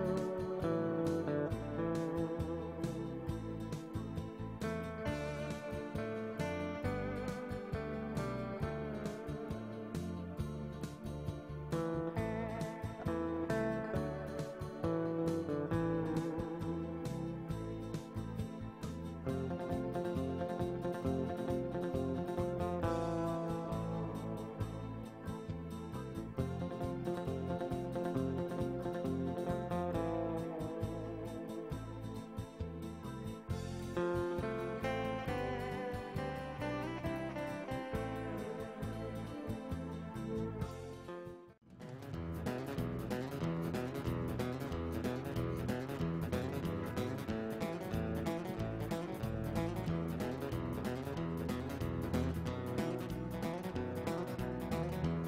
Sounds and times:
Background music: 0.0 - 55.2.

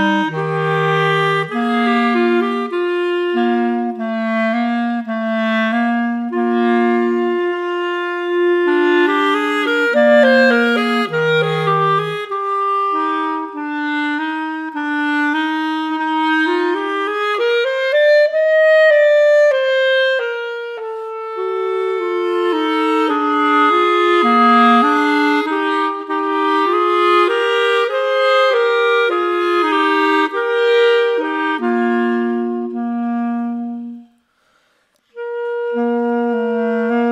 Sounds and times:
French horn: 0.0 - 37.1.

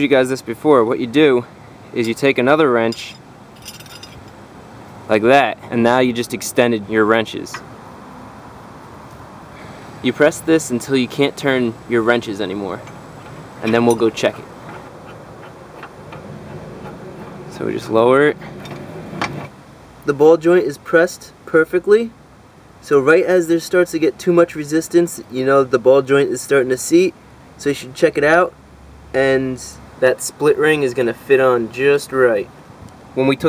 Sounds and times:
Speech: 0.0 - 3.2, 5.1 - 7.6, 10.0 - 12.9, 13.6 - 14.5, 17.5 - 18.4, 20.0 - 22.2, 22.8 - 28.6, 29.2 - 32.5, 33.2 - 33.4
Outside, urban or manmade: 0.0 - 33.4.

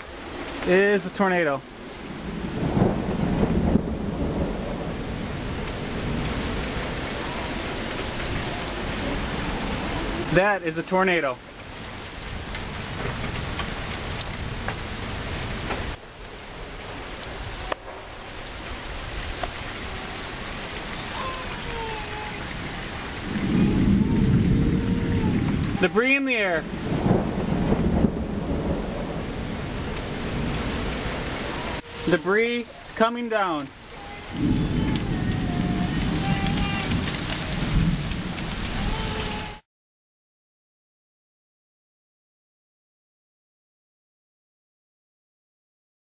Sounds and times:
Rain on surface: 0.0 - 39.7
Thunderstorm: 1.8 - 10.4, 16.6 - 25.9, 26.6 - 31.8, 34.3 - 39.5.

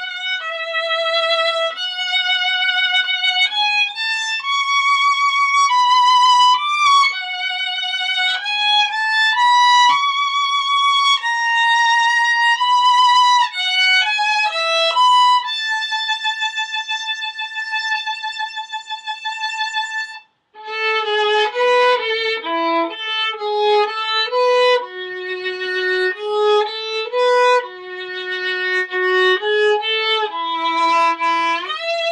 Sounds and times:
Violin, fiddle: 0.0 - 32.1.

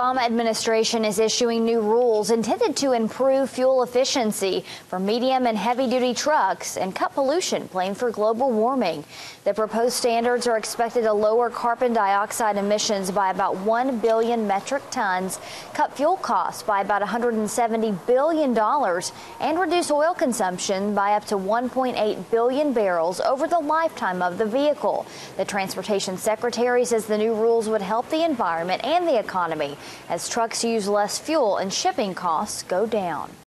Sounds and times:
Speech: 0.0 - 33.4.

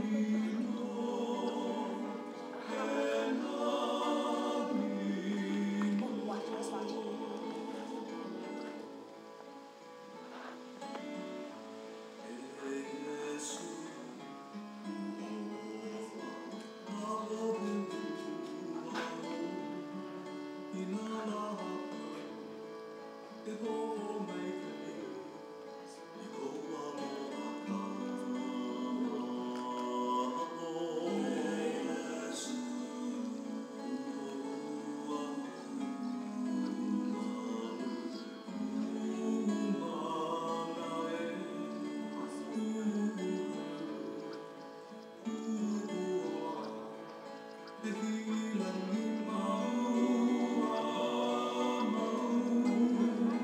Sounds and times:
Music: 0.0 - 53.4.

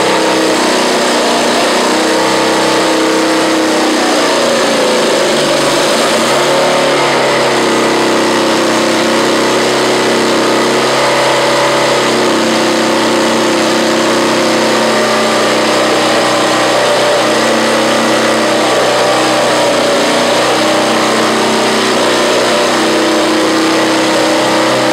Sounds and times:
Heavy engine (low frequency): 0.0 - 24.9.

